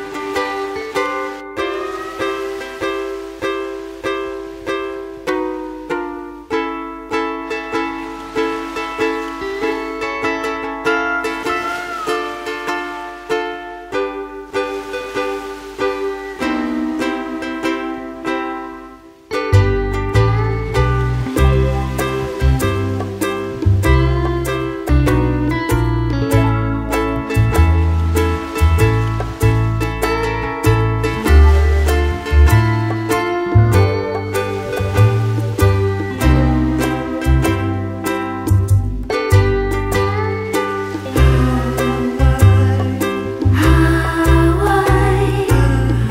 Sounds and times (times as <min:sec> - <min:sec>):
Slosh: 0:00.0 - 0:06.4, 0:07.4 - 0:46.1
Music: 0:00.0 - 0:46.1.